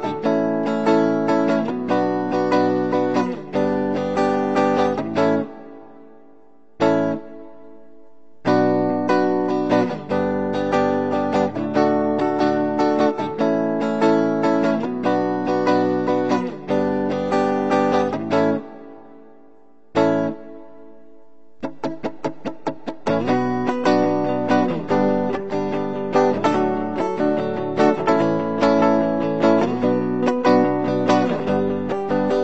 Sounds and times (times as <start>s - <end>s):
Acoustic guitar: 0.0s - 32.4s.